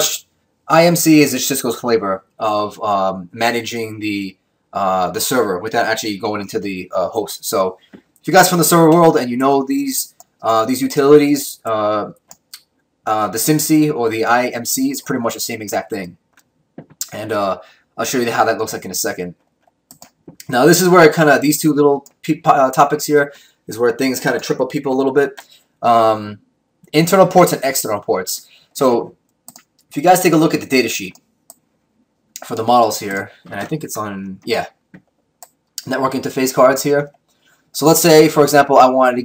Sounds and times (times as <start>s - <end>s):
Speech: 0.0s - 12.2s, 13.1s - 16.2s, 16.8s - 19.4s, 20.3s - 29.1s, 29.9s - 31.2s, 32.4s - 34.7s, 35.8s - 37.1s, 37.8s - 39.2s
Clicking: 10.2s - 10.4s, 19.4s - 20.5s, 29.2s - 29.9s, 31.1s - 31.6s.